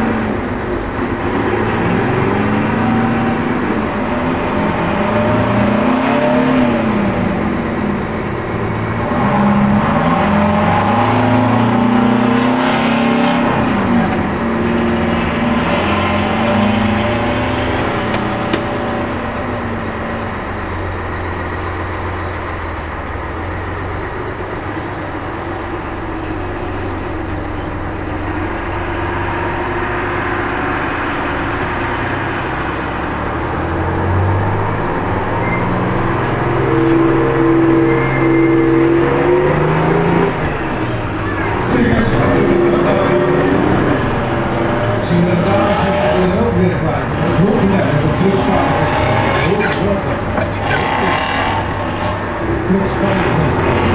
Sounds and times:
Truck: 0.0s - 53.9s.

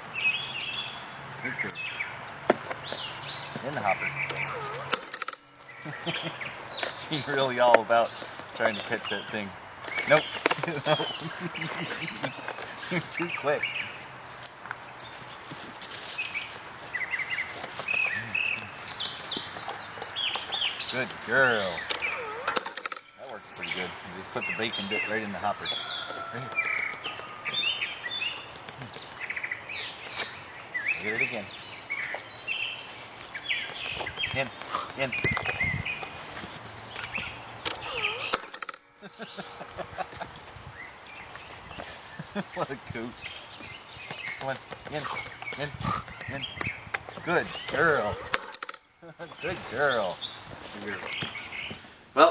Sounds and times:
Environmental noise: 0.0s - 52.3s
Outside, rural or natural: 0.0s - 52.3s.

